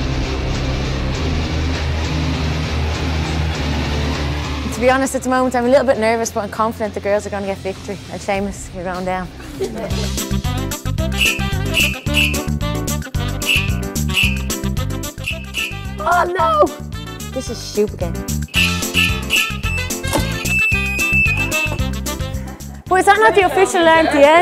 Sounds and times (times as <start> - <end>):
Music: 0.0 - 24.4
Speech: 4.7 - 10.0, 17.3 - 18.2, 22.9 - 24.4.